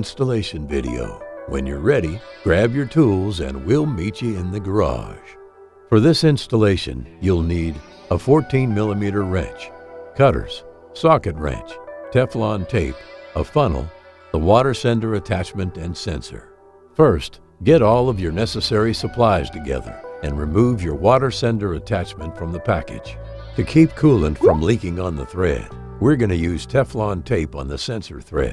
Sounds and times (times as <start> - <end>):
Speech: 0.0 - 5.4, 6.0 - 28.5
Music: 0.0 - 28.5.